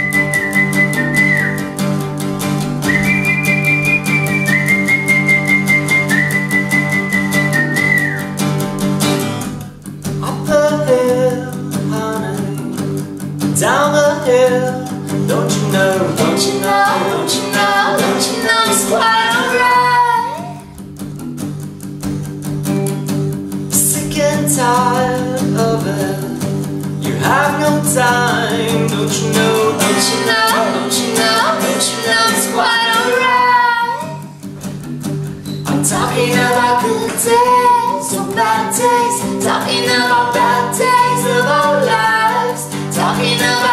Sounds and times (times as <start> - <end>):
Music: 0.0 - 43.7
Male singing: 10.2 - 12.7, 13.6 - 20.4, 23.8 - 34.2, 35.7 - 43.7.